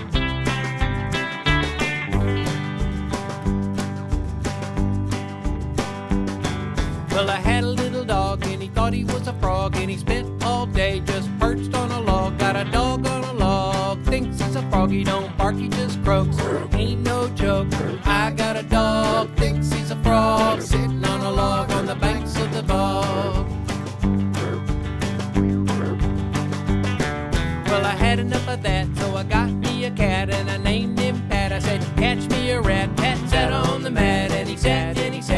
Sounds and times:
Music: 0.0s - 35.3s.

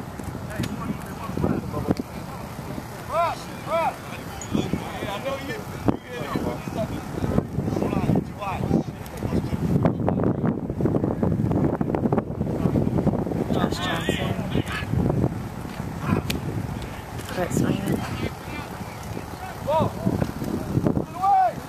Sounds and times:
Wind: 0.0s - 21.6s.

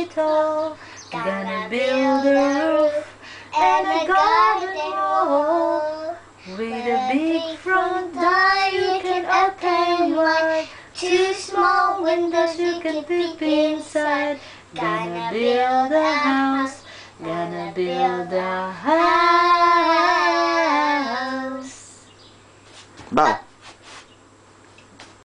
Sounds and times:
Child singing: 0.0s - 22.0s
Female singing: 0.0s - 22.1s
Speech: 23.1s - 23.5s.

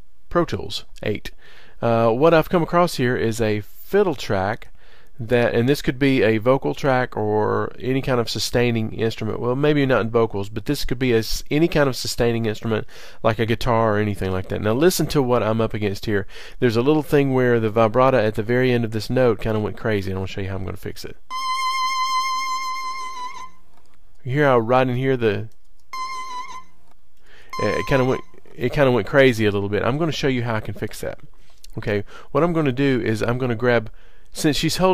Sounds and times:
Speech: 0.3s - 21.2s, 24.2s - 25.5s, 27.6s - 34.9s.

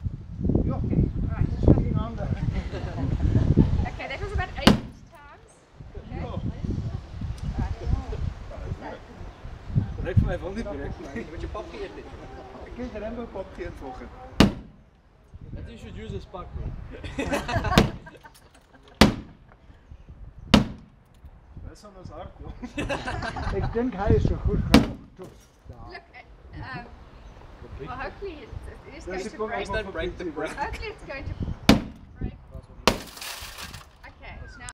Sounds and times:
Whack, thwack: 4.7s - 5.0s, 14.4s - 14.8s, 17.8s - 18.0s, 19.0s - 19.4s, 20.6s - 20.9s, 24.8s - 25.1s, 31.7s - 32.0s.

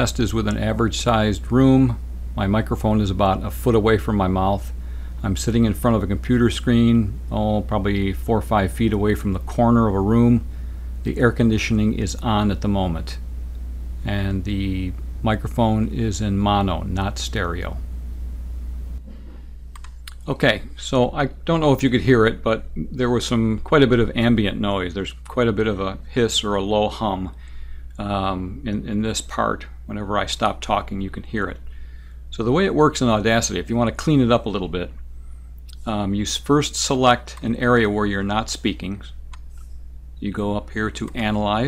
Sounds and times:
Speech: 0.0s - 13.2s, 14.0s - 17.8s, 20.1s - 27.4s, 28.0s - 31.6s, 32.3s - 35.0s, 35.8s - 39.2s, 40.2s - 41.6s.

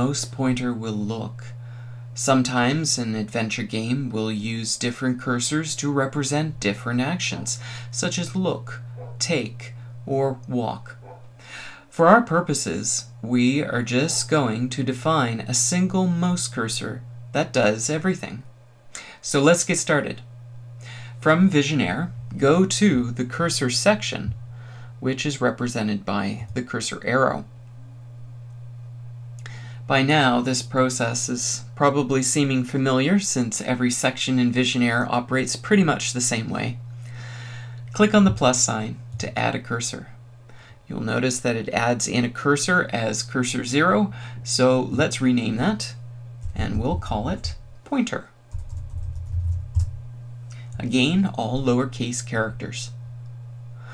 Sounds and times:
Speech: 0.0s - 1.6s, 2.2s - 11.0s, 11.9s - 18.5s, 19.2s - 20.3s, 21.2s - 24.4s, 25.0s - 27.5s, 29.9s - 36.8s, 37.9s - 40.2s, 40.9s - 48.4s, 50.8s - 53.0s.

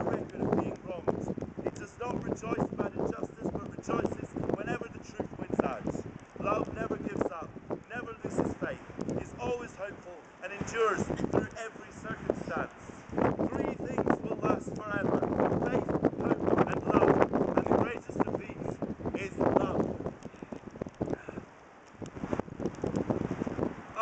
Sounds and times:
Speech: 0.0s - 12.7s, 13.4s - 19.8s
Outside, rural or natural: 0.0s - 24.0s.

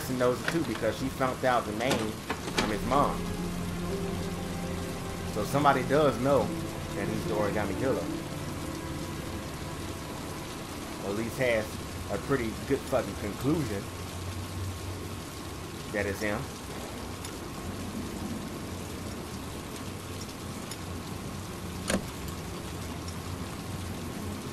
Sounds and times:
Speech: 0.0s - 3.2s, 5.4s - 8.1s, 11.0s - 13.9s, 15.9s - 16.5s
Rain on surface: 0.0s - 24.5s
Music: 2.4s - 13.7s.

